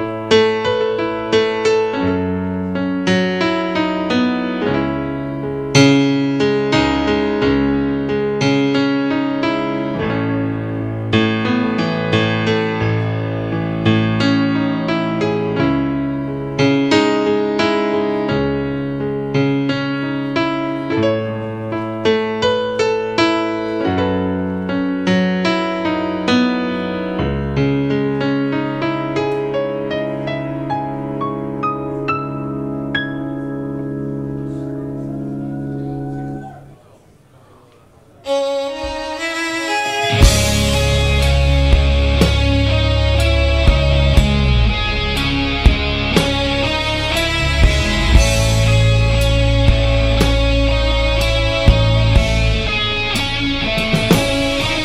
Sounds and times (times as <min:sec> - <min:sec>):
Music: 0:00.0 - 0:36.8, 0:38.2 - 0:54.8.